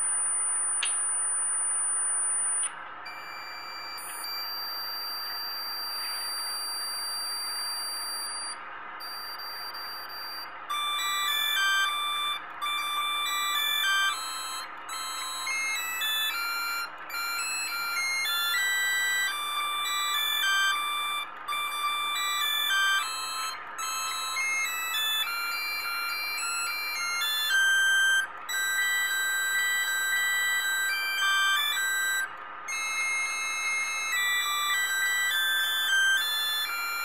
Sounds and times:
Music: 0.6 - 37.0.

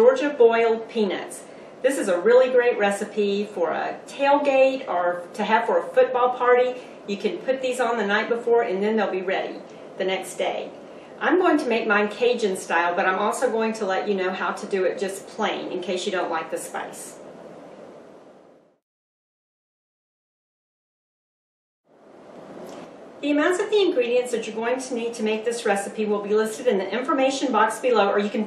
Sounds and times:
Speech: 0.0 - 17.2, 23.2 - 28.4.

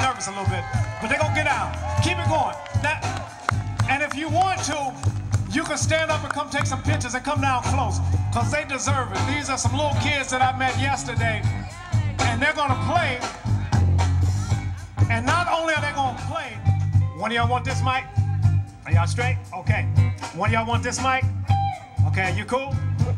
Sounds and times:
Speech: 0.0 - 3.2, 3.8 - 21.3, 22.0 - 23.1
Music: 0.0 - 23.1.

